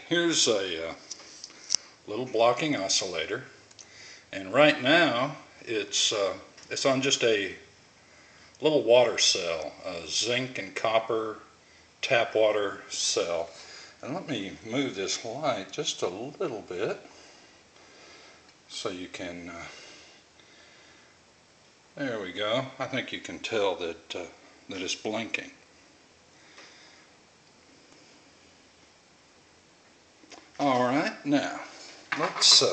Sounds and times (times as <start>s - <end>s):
Speech: 0.0s - 1.1s, 2.1s - 3.6s, 4.3s - 7.7s, 8.6s - 17.1s, 18.7s - 19.8s, 22.0s - 25.6s, 30.6s - 32.7s
Inside, small room: 0.0s - 32.7s.